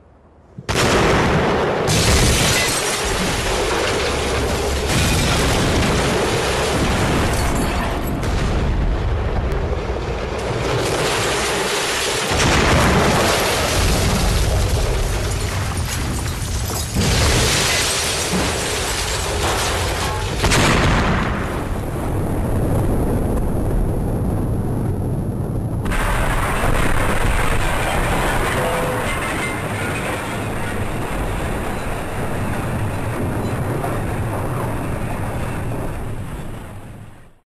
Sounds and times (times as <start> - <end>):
Explosion: 0.6 - 37.4.